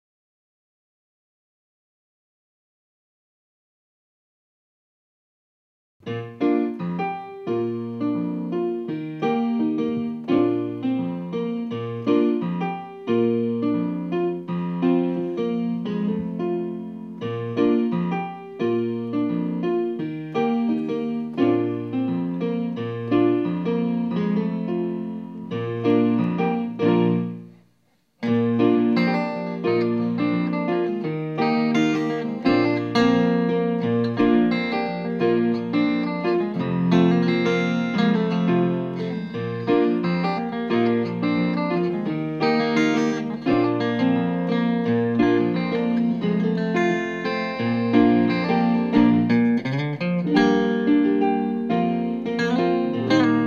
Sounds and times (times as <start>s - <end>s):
Electric piano: 6.0s - 53.4s.